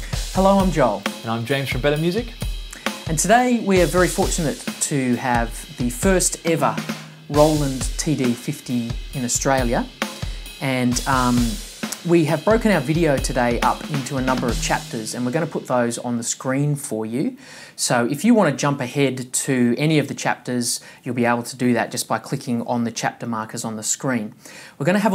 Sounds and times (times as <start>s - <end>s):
Drum: 0.0s - 16.5s
Drum kit: 0.0s - 17.3s
Speech: 0.3s - 2.4s, 3.1s - 10.0s, 10.6s - 25.1s.